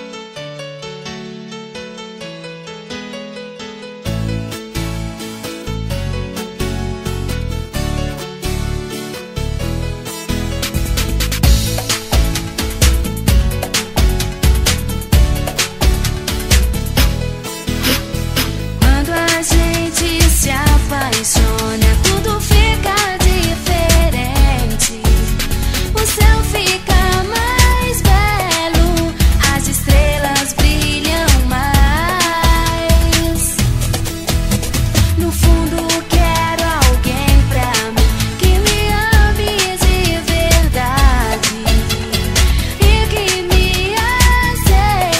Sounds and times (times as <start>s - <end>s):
Music: 0.0s - 45.1s.